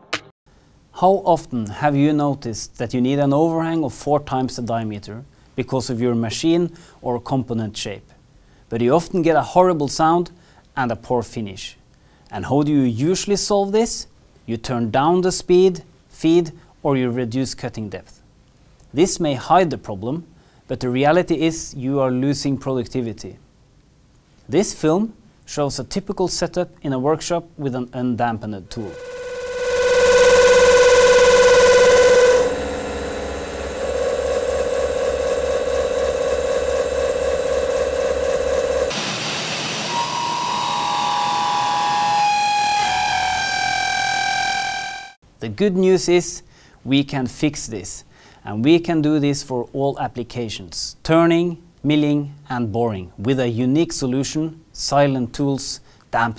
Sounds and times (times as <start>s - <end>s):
Speech: 1.0s - 18.2s, 18.9s - 23.4s, 24.5s - 29.0s, 45.4s - 56.3s.